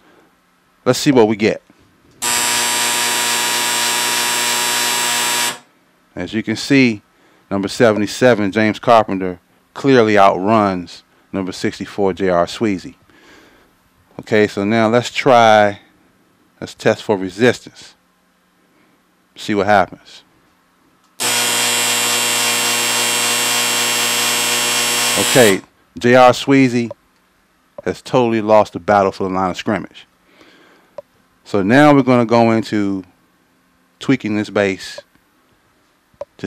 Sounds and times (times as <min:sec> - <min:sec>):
Electric toothbrush: 0:02.2 - 0:05.7, 0:21.2 - 0:25.6.